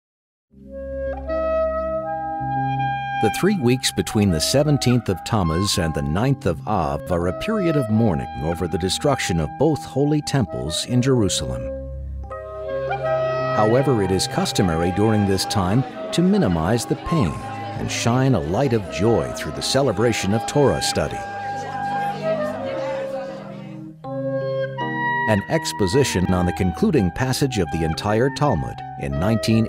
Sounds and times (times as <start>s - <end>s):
Flute: 1.2s - 11.4s, 12.3s - 24.0s, 24.9s - 29.6s
Speech: 3.2s - 11.7s, 13.6s - 23.8s, 25.3s - 29.6s.